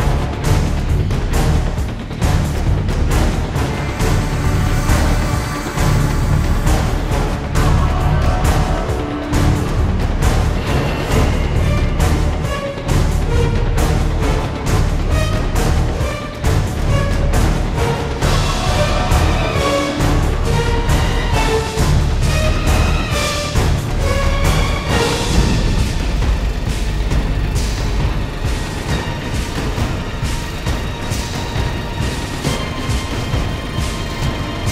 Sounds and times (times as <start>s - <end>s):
Music: 0.0s - 34.7s.